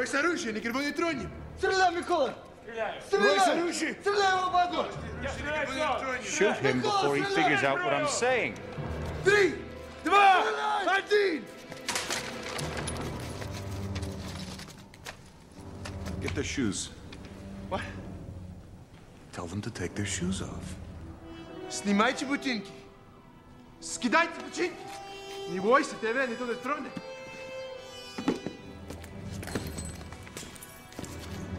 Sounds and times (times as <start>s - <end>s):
Music: 0.0s - 31.5s.